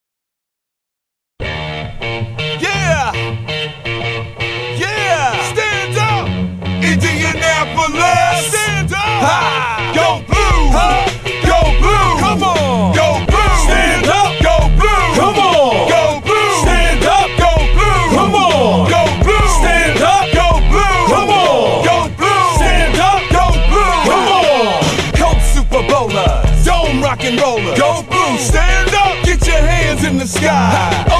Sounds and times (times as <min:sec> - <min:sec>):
Music: 0:01.4 - 0:31.1.